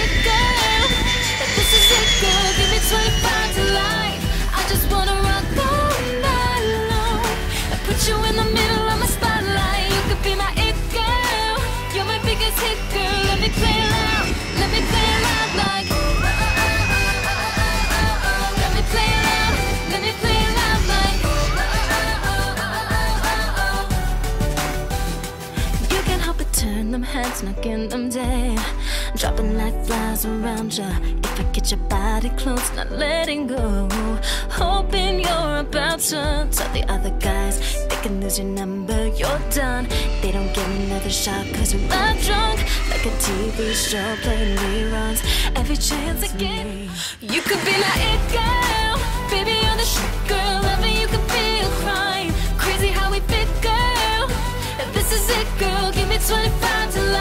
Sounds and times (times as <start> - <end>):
Pop music: 0.0 - 57.2.